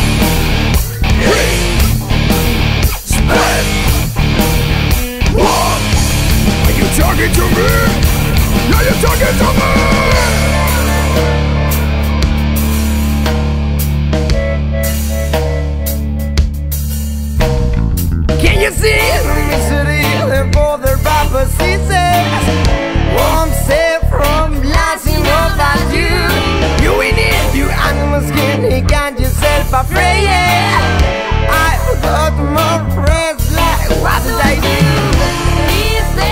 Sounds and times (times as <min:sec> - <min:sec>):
Music: 0:00.0 - 0:36.3.